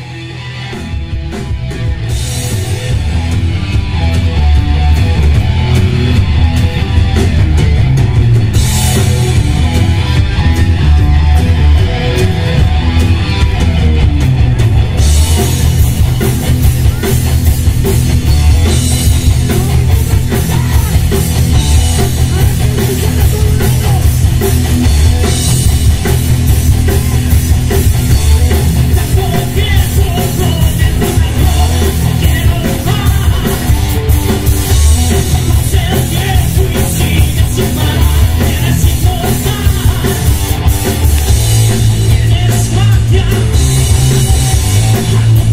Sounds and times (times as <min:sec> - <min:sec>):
Rock and roll: 0:00.0 - 0:45.5.